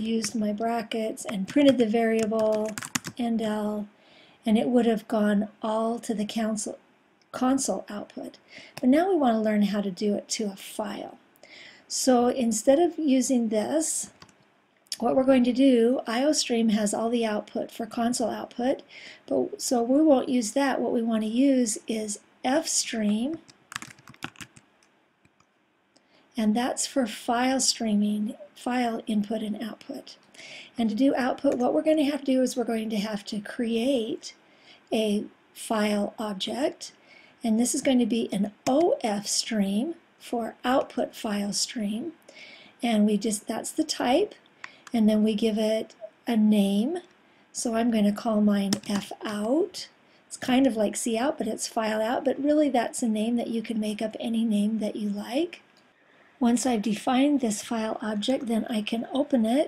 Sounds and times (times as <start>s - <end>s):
Speech: 0.0s - 3.9s, 4.5s - 6.8s, 7.4s - 11.2s, 11.9s - 14.2s, 14.9s - 23.4s, 26.4s - 30.2s, 30.8s - 42.2s, 42.8s - 55.6s, 56.4s - 59.6s.